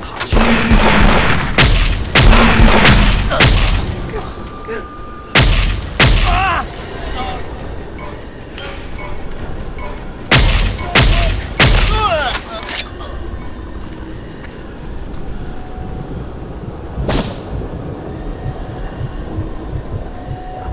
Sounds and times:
Outside, rural or natural: 0.0 - 20.7
Music: 2.5 - 16.6.

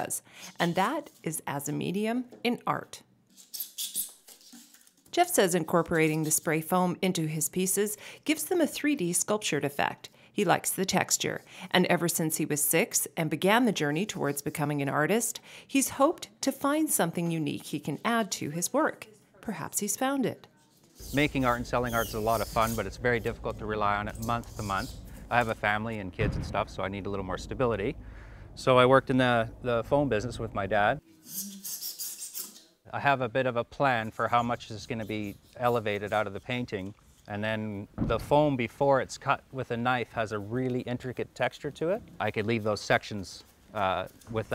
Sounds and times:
Speech: 5.2 - 28.0, 28.6 - 31.0, 32.9 - 44.5.

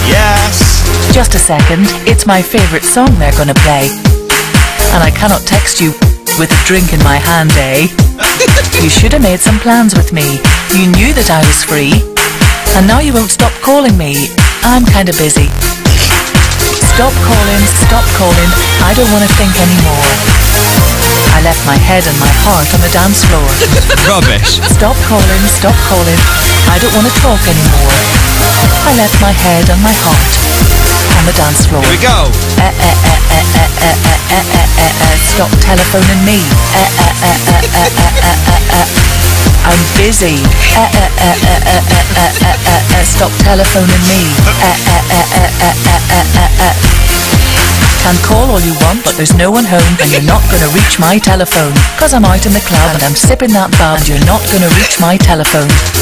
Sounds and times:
Speech: 0.0 - 4.0, 4.9 - 12.0, 12.7 - 16.2, 16.8 - 20.3, 21.3 - 28.1, 28.8 - 30.4, 31.1 - 38.9, 39.6 - 46.8, 48.0 - 56.0
Music: 0.0 - 56.0.

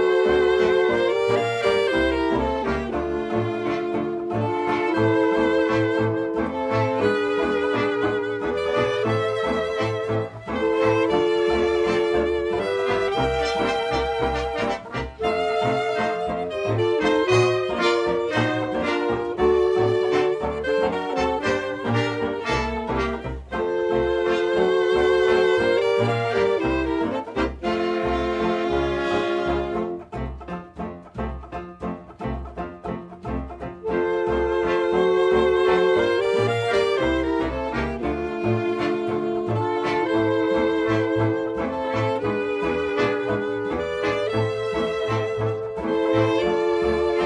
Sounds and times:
Music: 0.0 - 47.2.

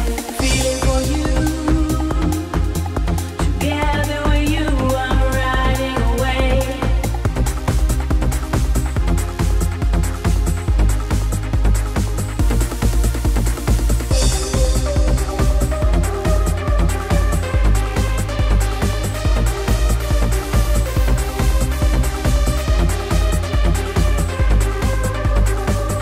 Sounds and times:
Music: 0.0 - 26.0.

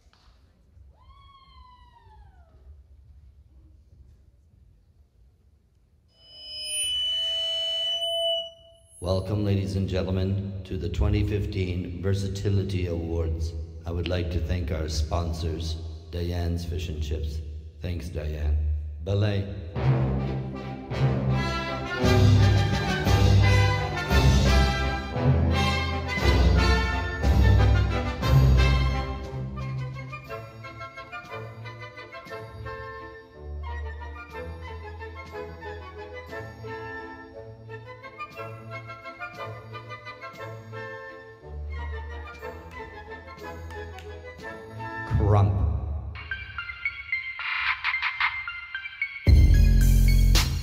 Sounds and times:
Speech: 9.0 - 19.6, 45.1 - 45.9.

